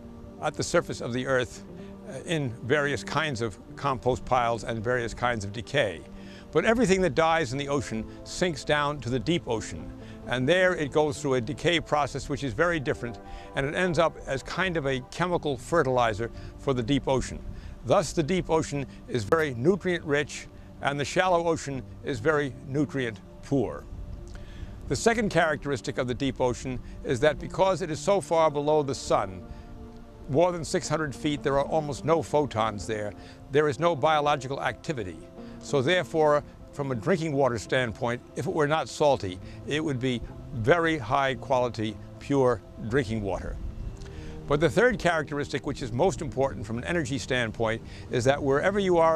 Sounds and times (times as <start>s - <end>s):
Music: 0.0s - 49.1s
Speech: 0.4s - 6.0s, 6.6s - 23.8s, 24.9s - 29.4s, 30.3s - 43.6s, 44.5s - 49.1s.